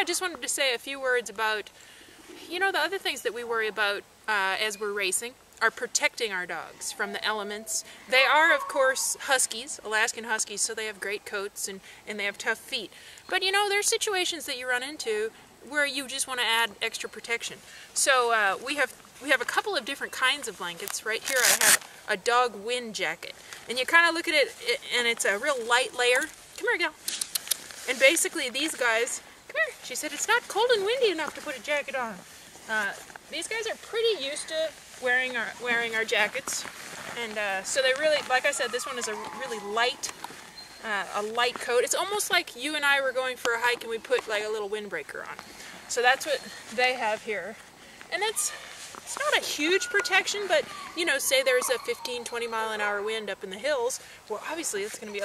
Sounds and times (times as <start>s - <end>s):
Speech: 0.0s - 1.7s, 2.4s - 27.0s, 27.9s - 36.6s, 37.2s - 40.1s, 40.8s - 55.2s.